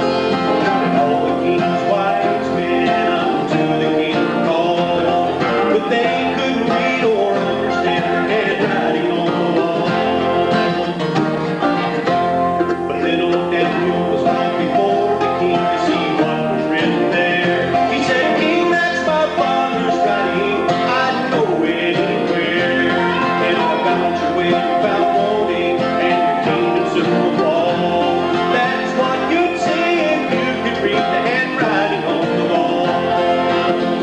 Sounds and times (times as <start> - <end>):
Music: 0.0 - 34.0.